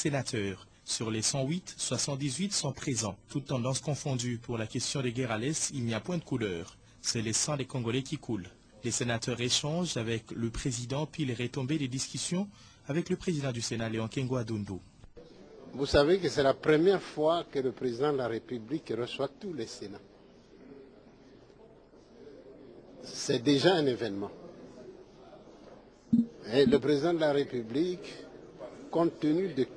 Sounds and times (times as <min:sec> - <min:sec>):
Speech: 0:00.0 - 0:29.7.